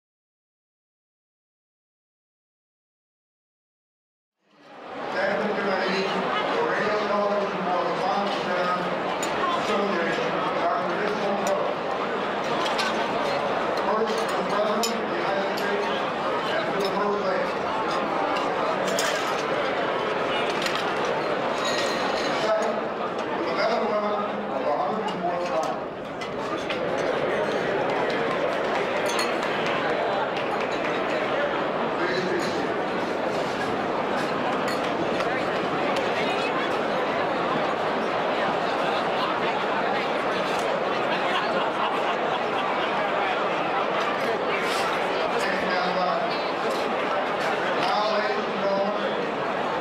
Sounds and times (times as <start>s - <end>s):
Speech: 4.7s - 20.7s, 21.6s - 32.9s, 35.2s - 49.8s.